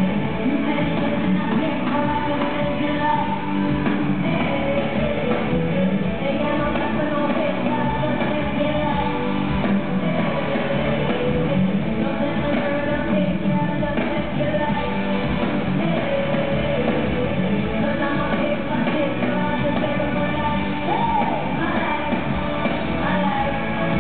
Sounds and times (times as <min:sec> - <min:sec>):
Music: 0:00.0 - 0:24.0.